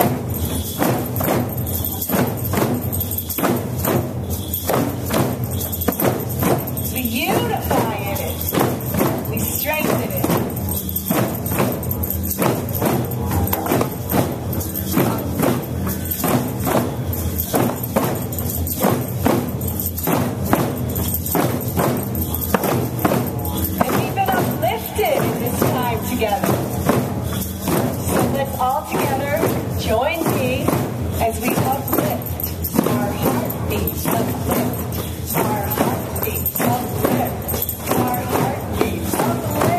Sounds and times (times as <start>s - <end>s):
Music: 0.0s - 39.7s
Speech: 6.9s - 8.5s, 9.2s - 10.6s, 23.2s - 26.9s, 28.0s - 39.7s.